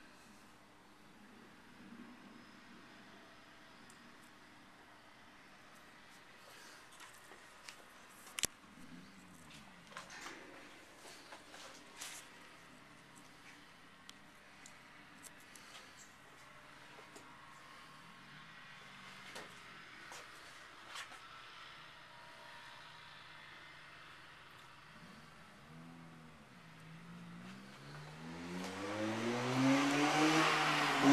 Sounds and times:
Engine: 0.0 - 31.1.

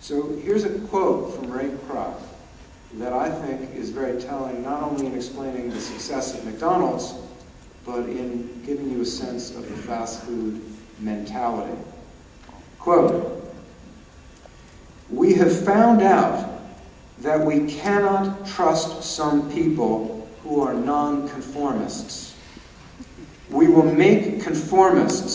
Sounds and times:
Male speech, man speaking: 0.0 - 2.4, 3.0 - 7.2, 7.9 - 11.9, 12.8 - 13.4, 15.1 - 16.6, 17.2 - 22.4, 23.5 - 25.3
Narration, monologue: 0.0 - 25.3.

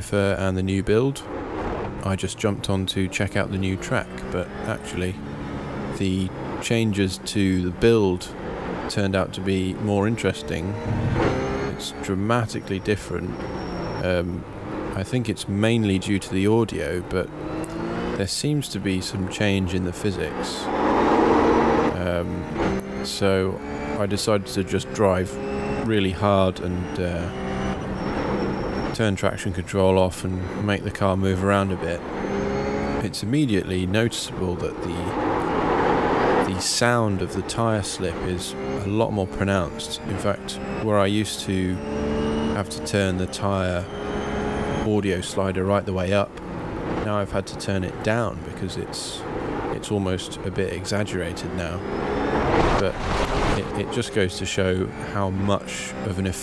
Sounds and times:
Speech: 0.0 - 1.3, 2.0 - 5.2, 6.0 - 8.3, 8.9 - 10.8, 11.7 - 13.3, 14.0 - 17.3, 18.2 - 20.7, 21.9 - 22.5, 23.1 - 27.4, 29.0 - 32.0, 33.0 - 35.2, 36.4 - 41.8, 42.5 - 43.9, 44.8 - 46.4, 47.0 - 51.8, 52.8 - 53.0, 53.6 - 56.4.

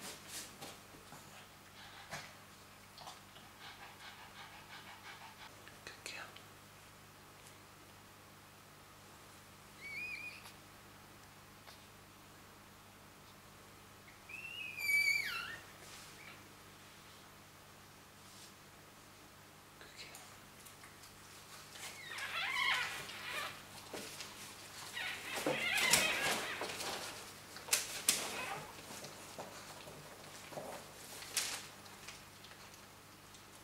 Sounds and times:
Inside, small room: 0.0 - 33.6
Domestic animals, pets: 1.2 - 2.4, 3.0 - 5.5, 9.8 - 10.6, 14.1 - 16.4, 21.7 - 24.2, 24.8 - 27.2, 27.8 - 30.8.

